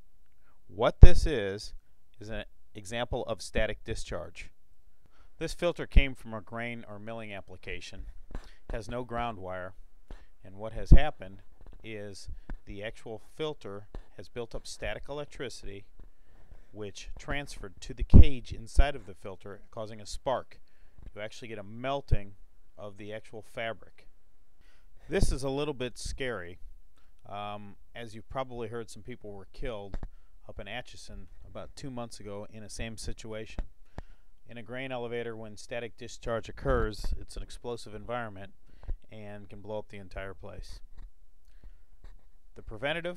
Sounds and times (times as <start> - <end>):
Speech: 0.7 - 4.6, 5.4 - 8.1, 8.7 - 9.8, 10.4 - 15.9, 16.7 - 24.1, 25.1 - 26.6, 27.2 - 33.6, 34.5 - 40.8, 42.6 - 43.1.